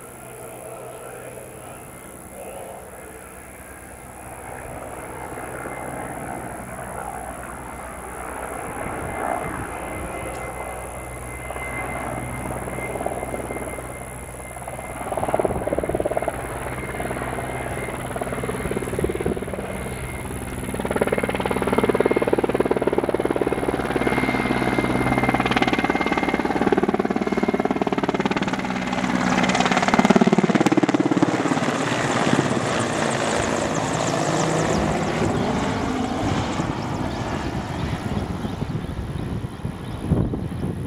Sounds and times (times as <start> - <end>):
Helicopter: 0.0 - 40.8.